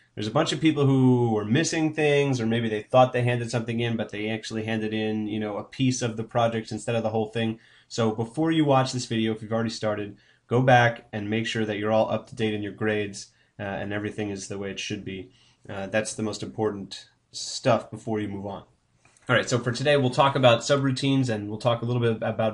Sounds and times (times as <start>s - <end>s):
Speech: 0.2s - 18.7s, 19.3s - 22.5s.